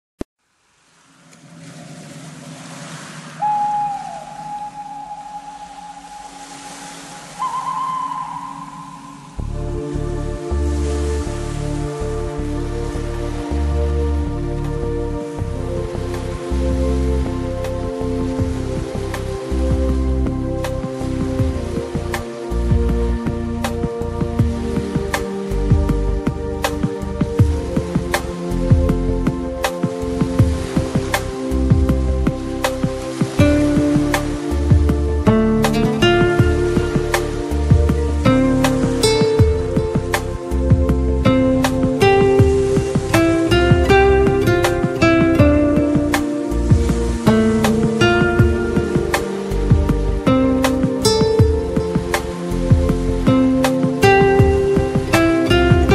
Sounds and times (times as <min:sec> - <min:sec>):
Music: 0:03.4 - 0:55.9.